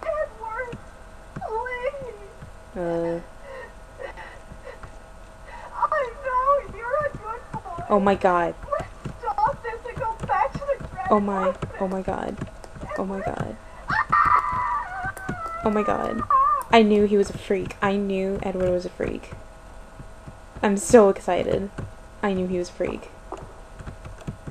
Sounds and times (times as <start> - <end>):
Speech: 0.0 - 0.8, 1.4 - 3.3, 5.8 - 13.6, 15.5 - 19.4, 20.6 - 23.2.